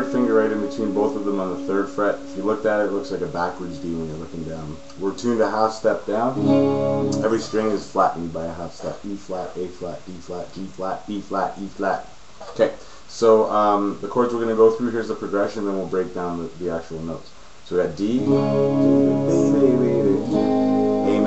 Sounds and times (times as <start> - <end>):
Speech: 0.0 - 6.4, 7.2 - 21.2
Strum: 0.0 - 8.1, 18.0 - 21.2.